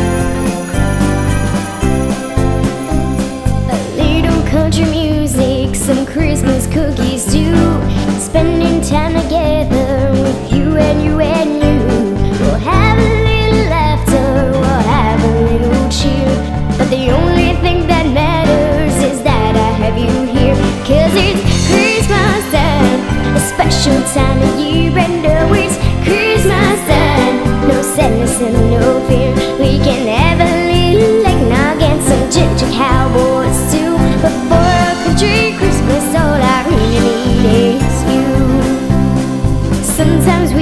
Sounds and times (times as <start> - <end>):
Music: 0.0 - 40.6.